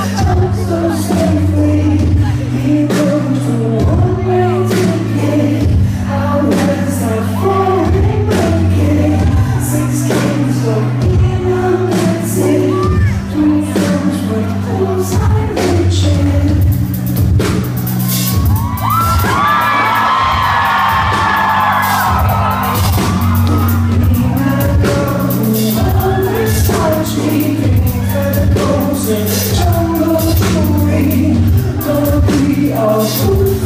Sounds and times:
Music: 0:00.0 - 0:33.6.

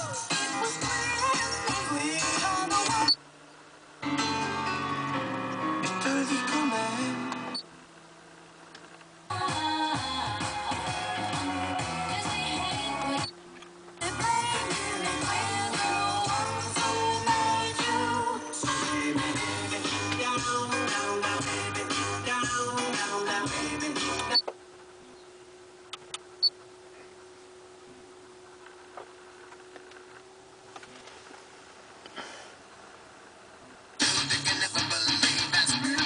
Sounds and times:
Music: 0:00.0 - 0:03.2, 0:04.0 - 0:07.6, 0:09.3 - 0:13.4, 0:14.0 - 0:24.4, 0:34.0 - 0:36.0.

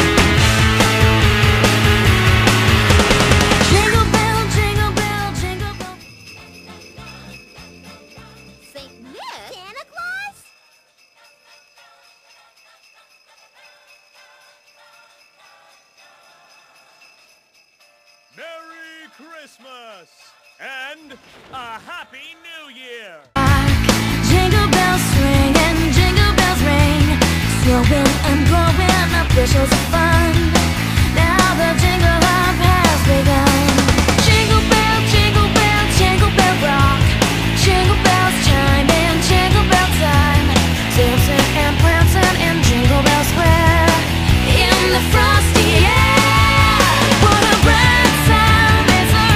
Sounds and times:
Jingle bell: 0:00.0 - 0:21.7, 0:23.4 - 0:49.3
Speech: 0:08.7 - 0:10.5, 0:18.4 - 0:23.3.

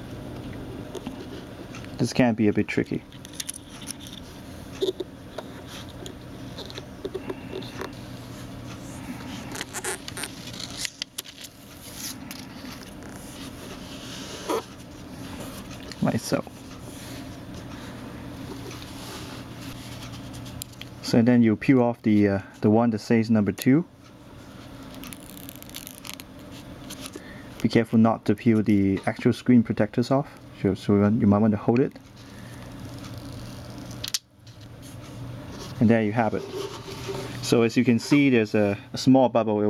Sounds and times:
Speech: 0:02.0 - 0:03.1, 0:16.0 - 0:16.5, 0:21.0 - 0:23.9, 0:27.6 - 0:32.0, 0:35.8 - 0:36.5, 0:37.4 - 0:39.6.

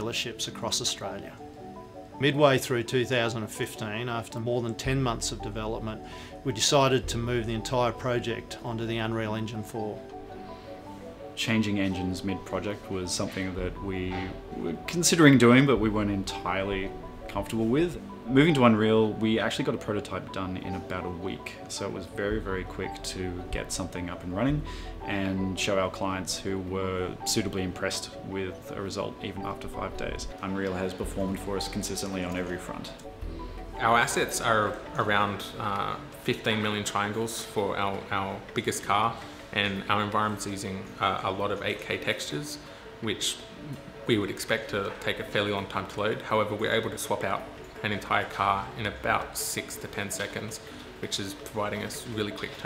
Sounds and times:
Speech: 0:00.0 - 0:01.4, 0:02.2 - 0:10.0, 0:11.4 - 0:33.0, 0:33.8 - 0:52.6
Music: 0:00.0 - 0:52.6.

